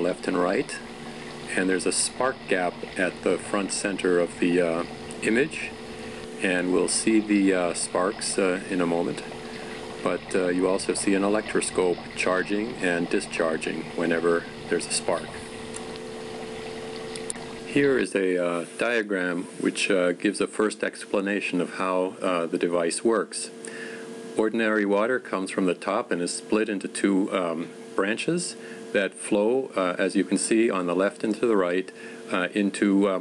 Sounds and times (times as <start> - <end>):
Speech: 0.0 - 0.8, 1.5 - 5.8, 6.4 - 9.3, 10.0 - 15.4, 17.7 - 23.6, 24.4 - 33.2.